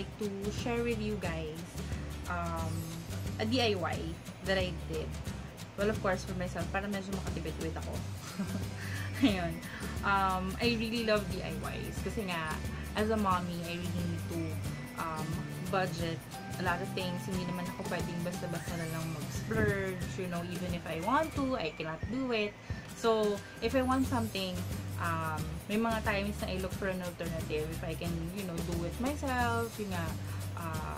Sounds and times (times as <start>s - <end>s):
Speech: 0.0s - 5.1s, 5.8s - 8.0s, 9.2s - 30.9s
Music: 0.0s - 30.9s.